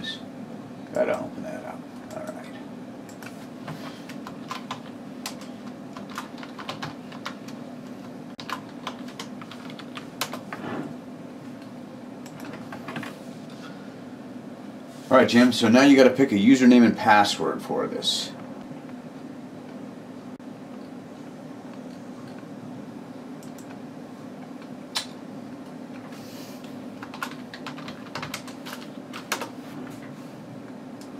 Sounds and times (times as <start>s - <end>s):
Typing: 8.4s - 10.4s, 27.0s - 29.5s.